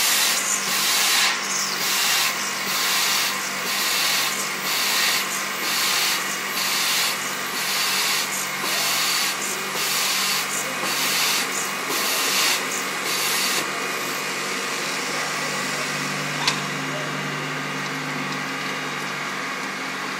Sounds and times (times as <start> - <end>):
Drill: 0.0 - 16.6.